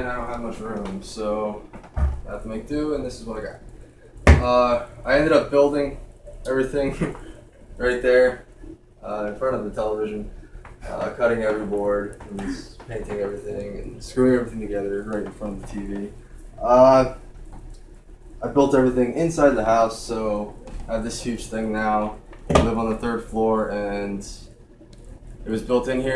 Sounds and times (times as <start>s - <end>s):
Speech: 0.0s - 1.7s, 2.3s - 3.6s, 4.4s - 7.2s, 7.8s - 8.4s, 9.0s - 17.2s, 18.4s - 24.5s, 25.4s - 26.1s.